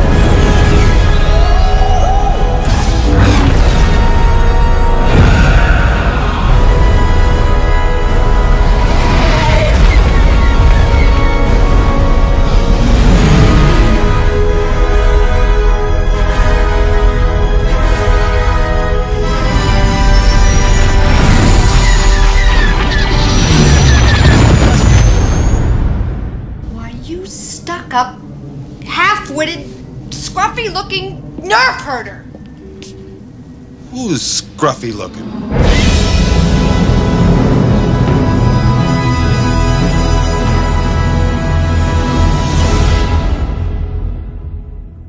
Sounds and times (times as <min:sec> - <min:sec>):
Theme music: 0:00.0 - 0:45.0.